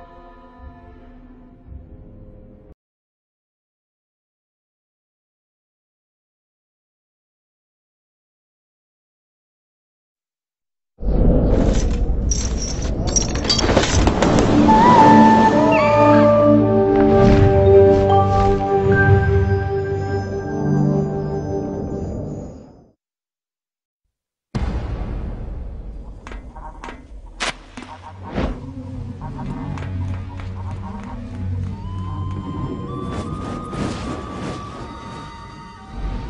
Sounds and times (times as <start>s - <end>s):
Music: 0.0s - 2.8s, 14.4s - 22.8s, 27.8s - 36.2s.